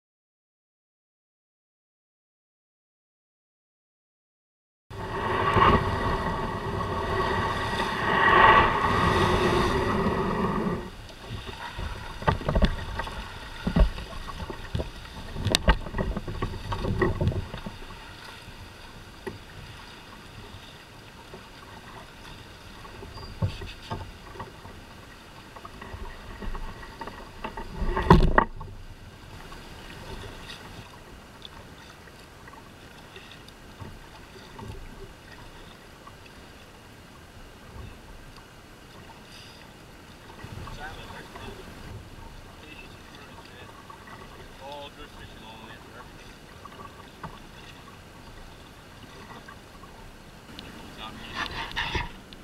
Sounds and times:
Rowboat, canoe, kayak: 4.9 - 52.4.

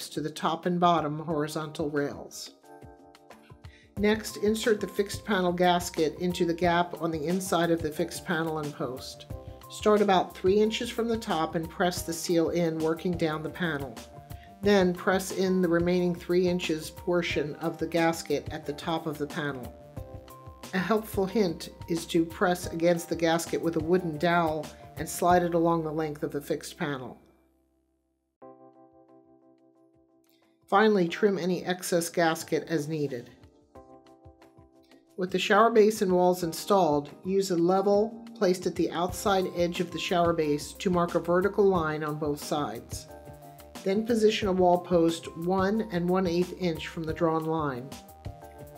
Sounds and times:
Speech: 0.0 - 2.6, 4.0 - 14.0, 14.6 - 19.7, 20.7 - 27.2, 30.7 - 33.3, 35.2 - 43.1, 43.8 - 47.9
Music: 0.0 - 48.7.

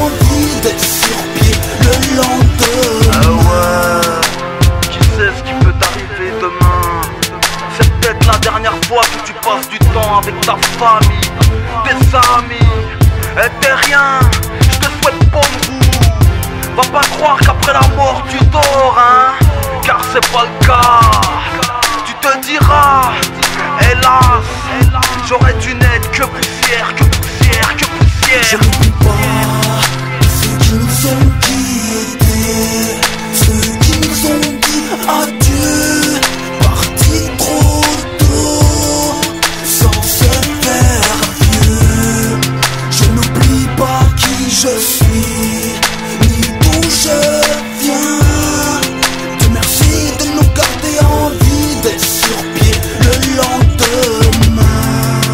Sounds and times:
Music: 0.0 - 55.3
Rapping: 0.0 - 55.3.

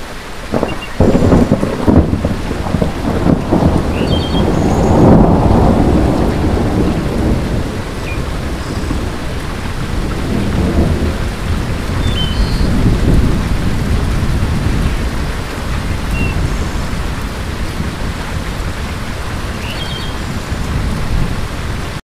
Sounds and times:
Rain on surface: 0.0 - 22.0.

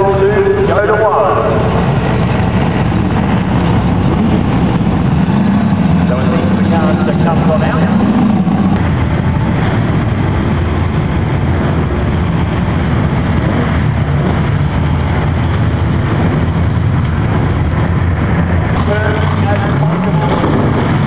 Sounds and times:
Speech: 0.0 - 1.8, 6.1 - 8.0, 18.8 - 20.6
Race car, auto racing: 0.0 - 21.0.

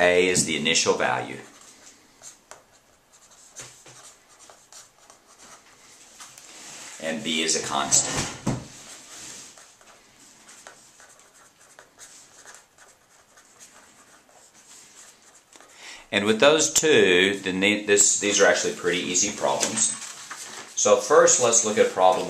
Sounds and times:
Speech: 0.0 - 1.5, 7.0 - 8.4, 16.1 - 20.0, 20.8 - 22.2
Writing: 0.0 - 8.1, 8.7 - 15.8.

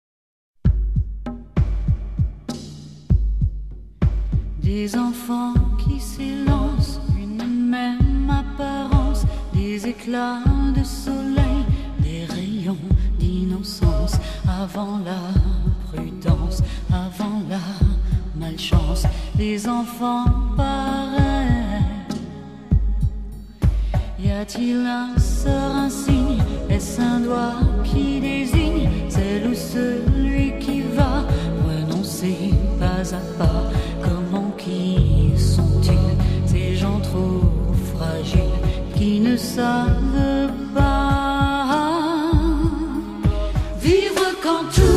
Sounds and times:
Music: 0.6 - 44.9.

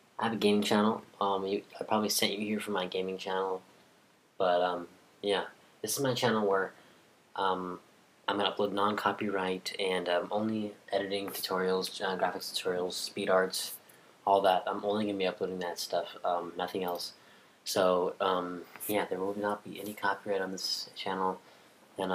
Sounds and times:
Speech: 0.2 - 3.7, 4.4 - 6.8, 7.4 - 21.4.

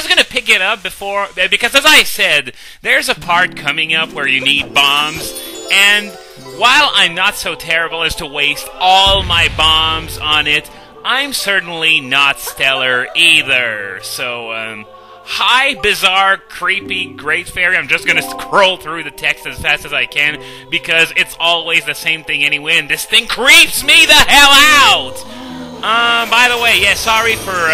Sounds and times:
Speech: 0.0 - 27.7
Music: 3.1 - 27.7.

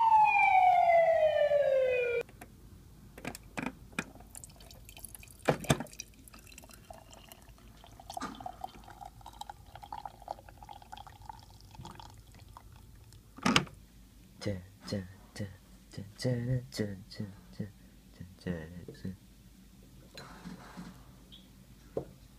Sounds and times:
Water tap, faucet: 4.3 - 12.5.

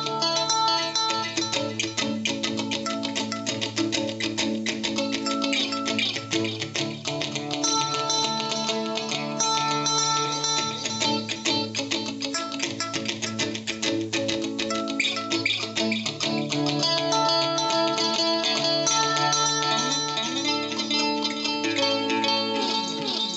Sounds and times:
Acoustic guitar: 0.0 - 23.3
Strum: 0.0 - 23.3.

